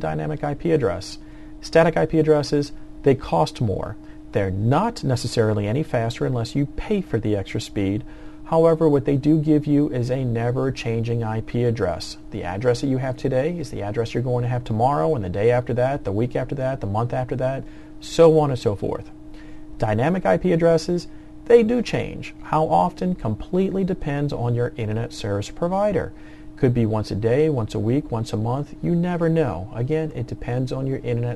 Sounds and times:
Speech: 0:00.0 - 0:19.1, 0:19.8 - 0:31.3.

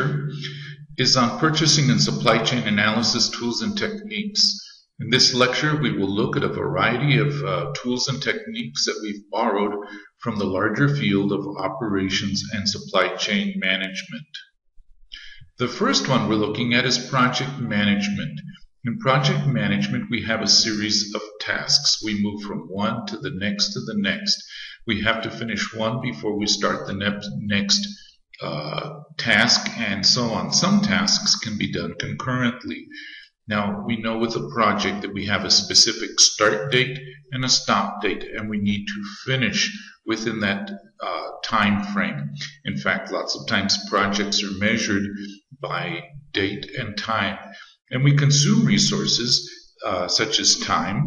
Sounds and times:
Speech: 0:00.0 - 0:14.5, 0:15.2 - 0:51.0.

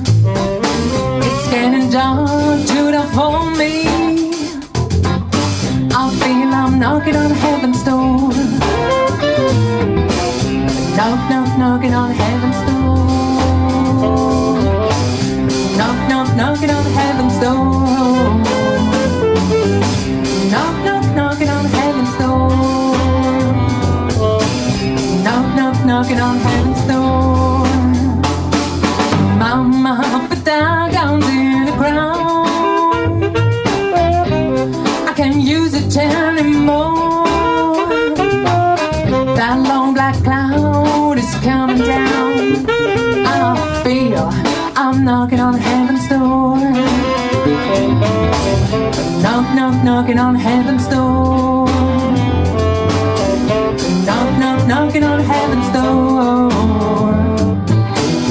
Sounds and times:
Music: 0:00.0 - 0:58.3.

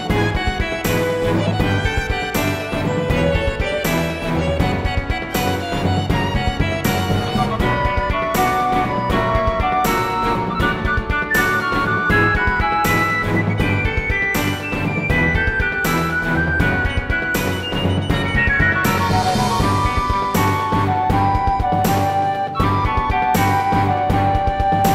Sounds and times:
Independent music: 0:00.0 - 0:24.9.

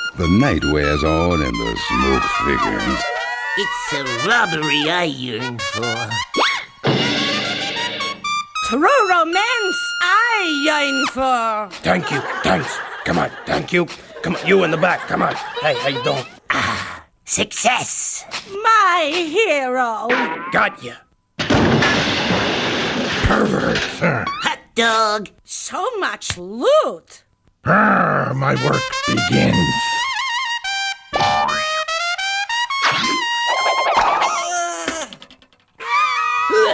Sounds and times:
Music: 0:00.0 - 0:11.2, 0:28.6 - 0:34.0
Speech: 0:23.3 - 0:29.9.

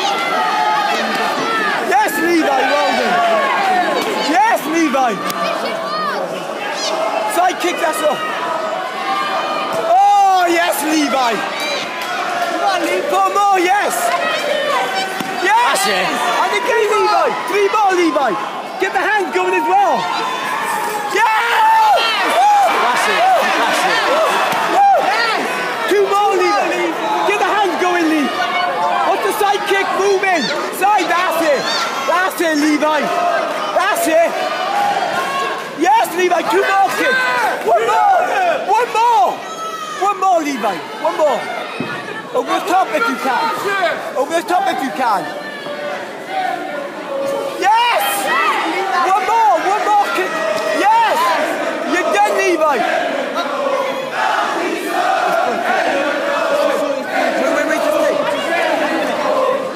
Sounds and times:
Crowd: 0:00.0 - 0:59.7.

